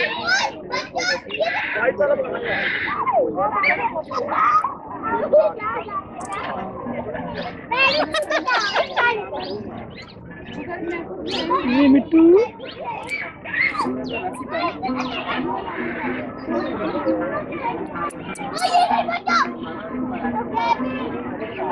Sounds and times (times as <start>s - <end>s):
Speech: 0.0s - 21.7s.